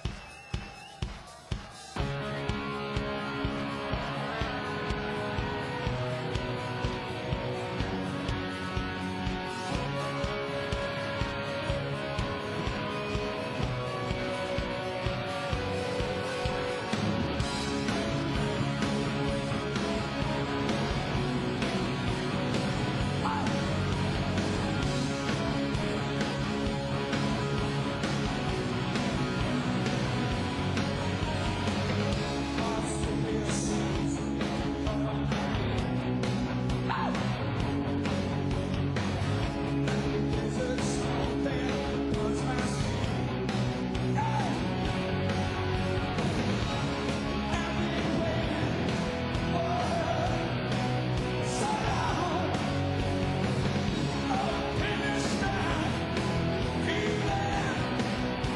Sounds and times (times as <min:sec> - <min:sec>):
Music: 0:00.0 - 0:58.5.